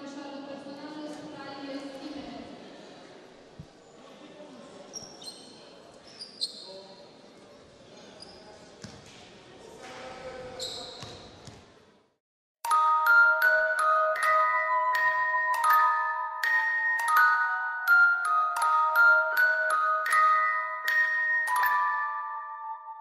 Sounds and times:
Basketball bounce: 8.8 - 9.0, 11.0 - 11.6
Music: 12.6 - 23.0.

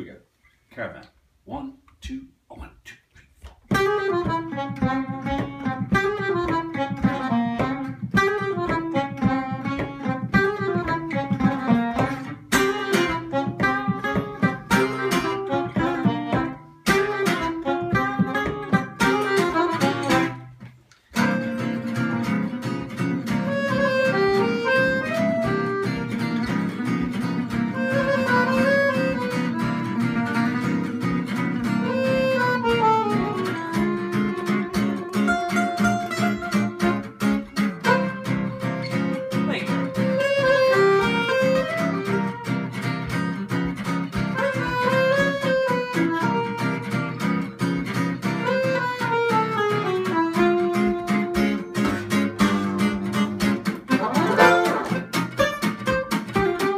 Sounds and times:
Acoustic guitar: 2.9 - 56.7
Jazz: 3.0 - 56.7
Strum: 3.7 - 56.7.

